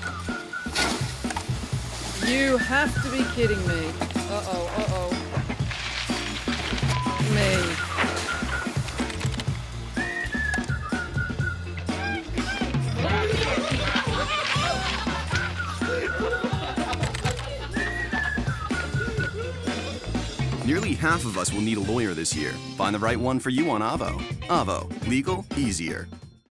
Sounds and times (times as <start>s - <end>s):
Music: 0.0s - 26.5s
Speech: 2.2s - 5.2s, 7.2s - 7.8s, 20.6s - 26.1s.